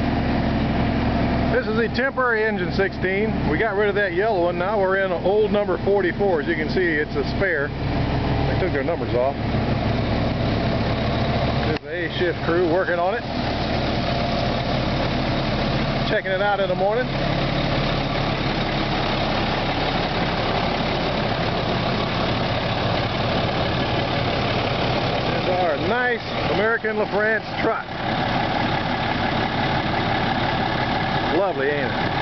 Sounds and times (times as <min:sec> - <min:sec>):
Idling: 0:00.0 - 0:32.2
Medium engine (mid frequency): 0:00.0 - 0:32.2
Vehicle: 0:00.0 - 0:32.2
Speech: 0:01.5 - 0:07.8, 0:08.5 - 0:09.4, 0:11.6 - 0:13.3, 0:16.0 - 0:17.2, 0:25.3 - 0:28.0, 0:31.3 - 0:32.0.